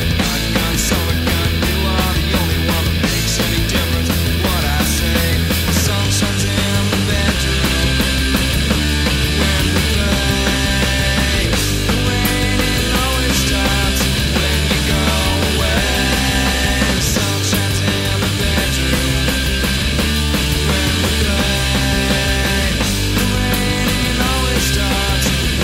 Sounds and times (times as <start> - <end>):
Punk rock: 0.0 - 25.6.